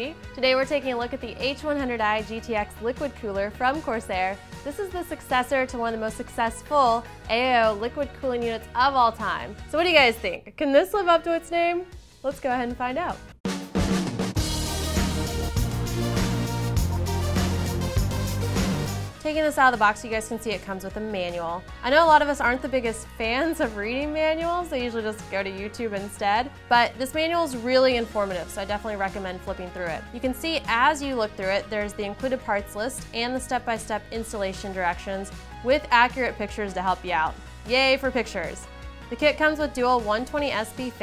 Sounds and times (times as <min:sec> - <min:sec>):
Speech: 0:00.0 - 0:13.2, 0:19.2 - 0:41.0
Music: 0:00.0 - 0:41.0.